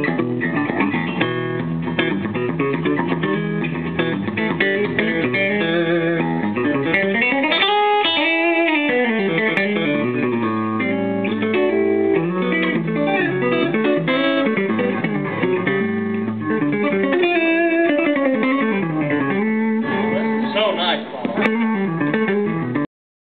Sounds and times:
Strum: 0:00.0 - 0:22.8
Acoustic guitar: 0:00.0 - 0:22.9
Speech: 0:19.9 - 0:21.4.

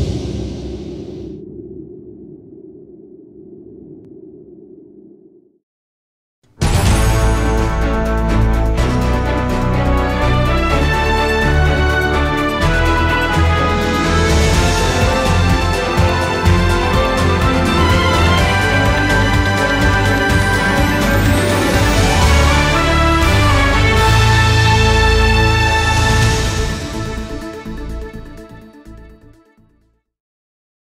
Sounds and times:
Music: 0:06.4 - 0:30.2.

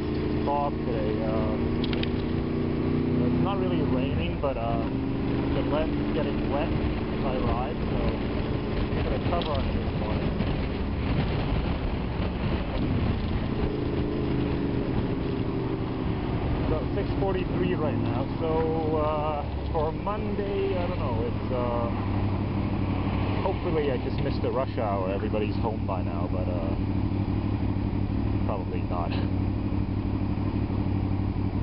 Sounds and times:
Motorcycle: 0:00.0 - 0:31.6
Speech: 0:00.5 - 0:01.6, 0:03.2 - 0:04.9, 0:05.6 - 0:08.2, 0:09.1 - 0:10.3, 0:16.7 - 0:22.0, 0:23.4 - 0:26.8, 0:28.5 - 0:29.3.

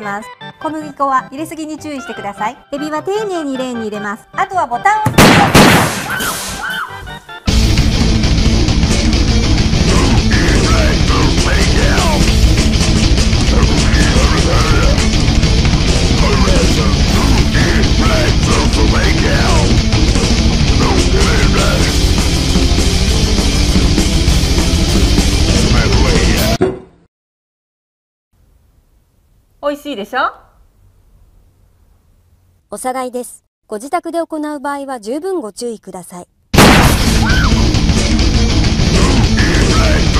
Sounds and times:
Music: 0:00.0 - 0:05.2, 0:06.1 - 0:26.6, 0:36.6 - 0:40.2.

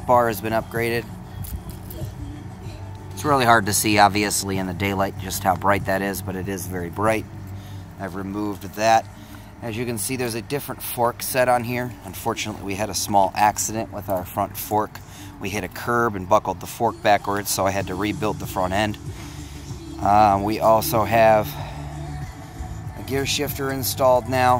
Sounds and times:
Speech: 0:00.0 - 0:01.1, 0:03.2 - 0:07.2, 0:08.0 - 0:09.0, 0:09.6 - 0:19.0, 0:20.0 - 0:21.6, 0:23.0 - 0:24.6.

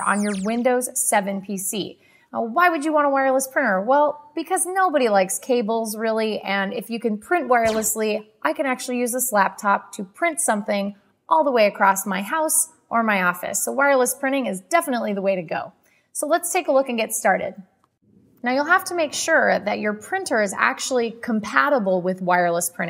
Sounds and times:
Speech: 0:00.0 - 0:17.6, 0:18.4 - 0:22.8.

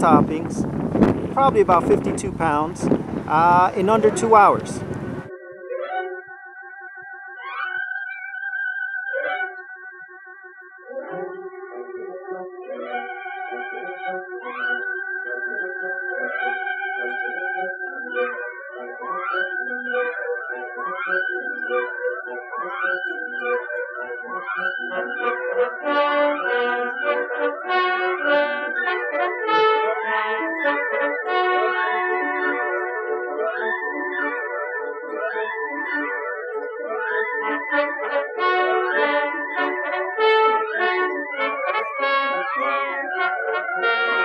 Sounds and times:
Trombone: 0:00.0 - 0:05.3, 0:37.6 - 0:44.2.

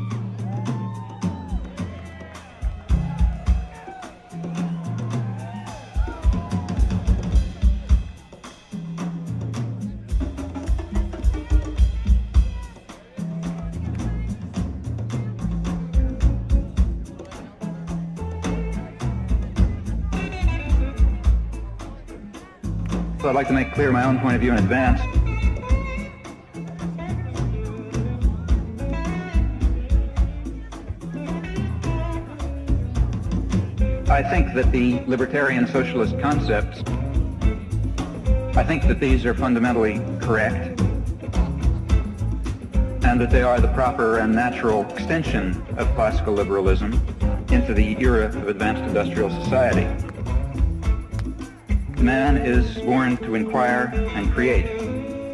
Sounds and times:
Music: 0:00.0 - 0:55.3
Speech: 0:21.5 - 0:25.2, 0:34.1 - 0:36.9, 0:38.5 - 0:40.8, 0:43.0 - 0:50.0, 0:52.0 - 0:54.8.

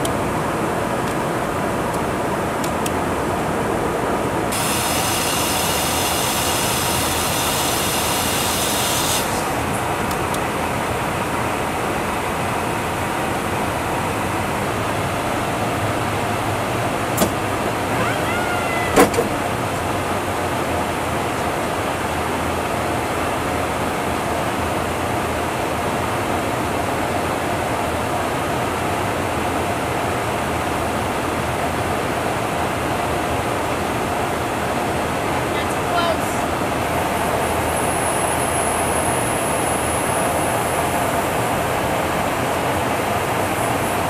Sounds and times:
Fixed-wing aircraft, airplane: 0:00.0 - 0:44.1
Jet engine: 0:00.0 - 0:44.1.

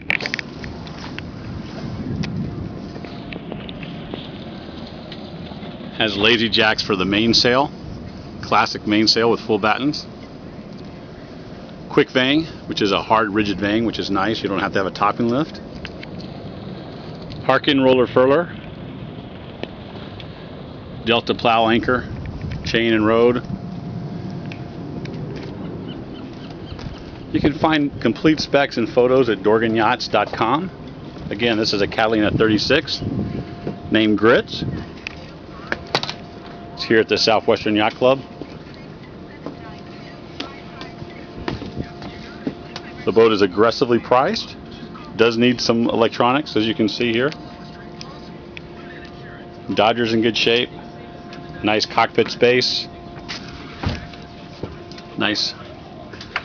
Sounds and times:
Speech: 0:06.0 - 0:07.7, 0:08.4 - 0:10.1, 0:11.9 - 0:15.6, 0:17.4 - 0:18.6, 0:21.1 - 0:22.1, 0:22.7 - 0:23.5, 0:27.3 - 0:30.7, 0:31.3 - 0:33.1, 0:33.9 - 0:35.8, 0:36.8 - 0:56.2.

